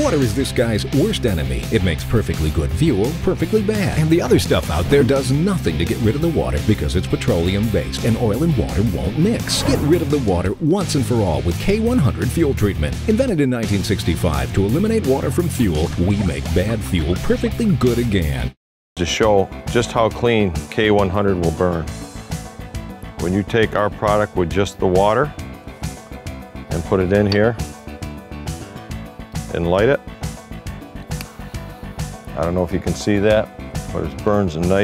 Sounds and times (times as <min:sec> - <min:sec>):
Speech: 0:00.0 - 0:21.9, 0:23.2 - 0:25.3, 0:26.7 - 0:27.6, 0:29.5 - 0:30.0, 0:32.3 - 0:34.8
Music: 0:00.0 - 0:34.8.